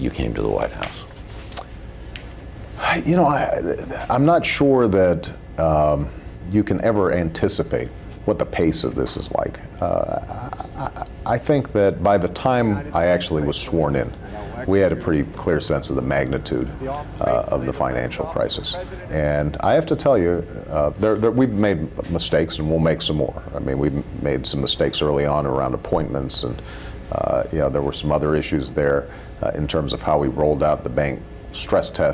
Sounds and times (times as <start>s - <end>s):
Speech: 0.0s - 1.2s, 2.8s - 32.1s.